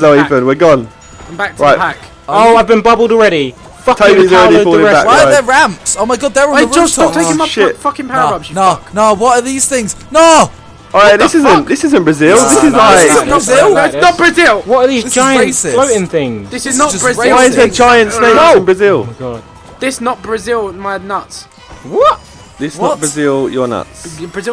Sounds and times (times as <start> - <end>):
Music: 0.0 - 24.5.